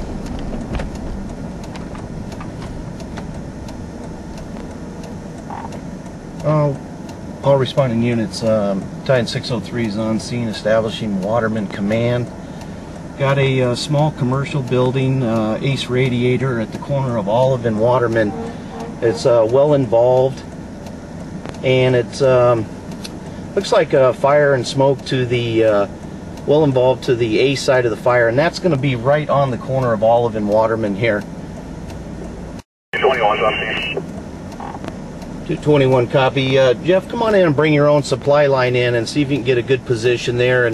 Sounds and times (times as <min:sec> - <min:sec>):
Speech: 0:06.4 - 0:06.8, 0:07.4 - 0:12.3, 0:13.2 - 0:20.5, 0:21.6 - 0:22.7, 0:23.6 - 0:25.9, 0:26.5 - 0:31.2, 0:33.0 - 0:34.0, 0:35.5 - 0:40.7.